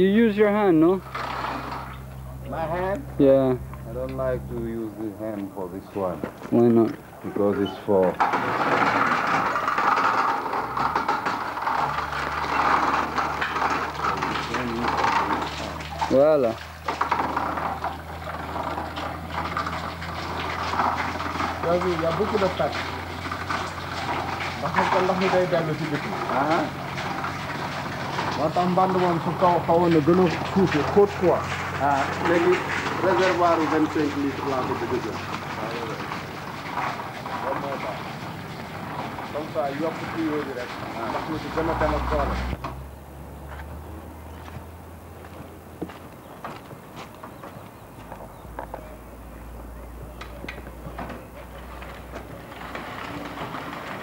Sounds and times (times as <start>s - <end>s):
Bicycle: 0.0s - 54.0s
Speech: 2.5s - 8.2s, 21.6s - 22.8s, 24.6s - 26.7s, 28.4s - 36.0s, 37.4s - 38.0s, 39.3s - 42.4s.